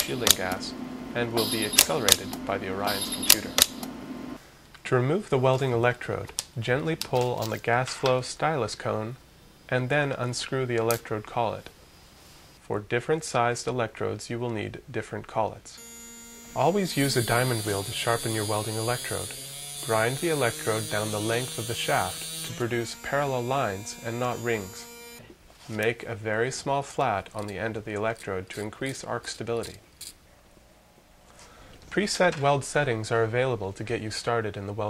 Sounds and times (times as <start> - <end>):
Speech: 0.0 - 3.6, 4.8 - 11.7, 12.6 - 15.8, 16.6 - 24.9, 25.7 - 29.8, 31.9 - 34.9.